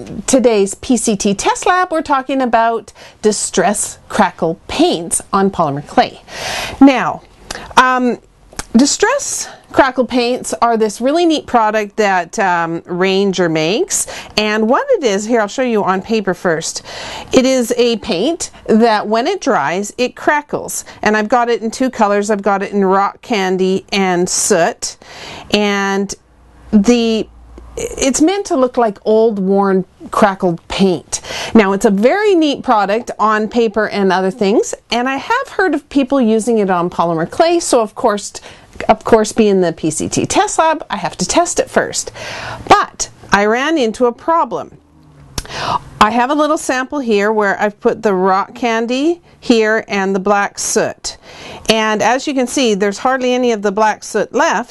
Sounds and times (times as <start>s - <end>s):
Speech: 0.0s - 6.2s, 6.8s - 26.2s, 26.8s - 44.8s, 45.7s - 54.7s.